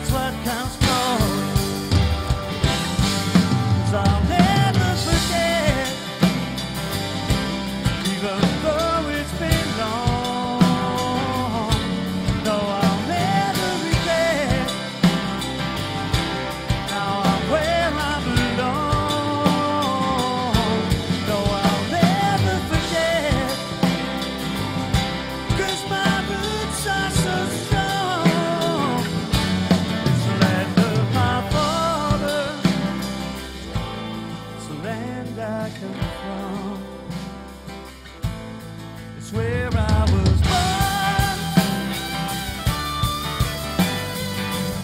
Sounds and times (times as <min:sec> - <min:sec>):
Blues: 0:00.0 - 0:44.8.